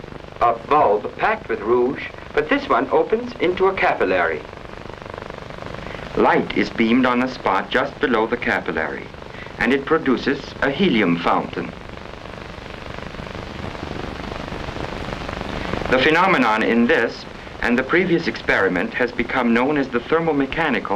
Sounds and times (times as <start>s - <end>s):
Speech: 0.4s - 4.4s, 6.1s - 11.8s, 15.9s - 20.9s.